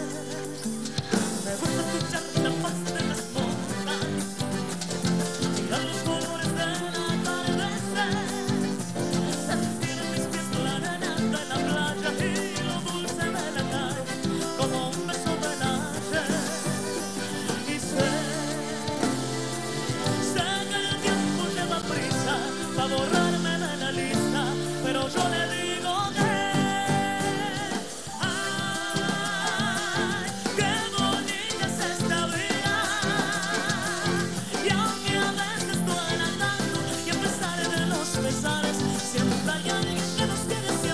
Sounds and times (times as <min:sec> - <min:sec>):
Music: 0:00.0 - 0:40.9.